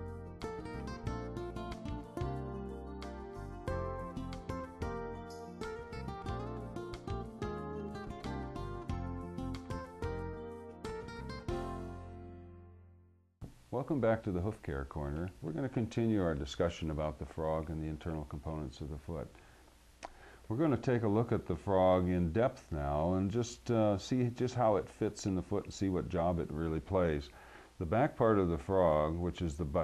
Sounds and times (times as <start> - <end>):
Speech: 13.7 - 19.4, 20.5 - 29.8.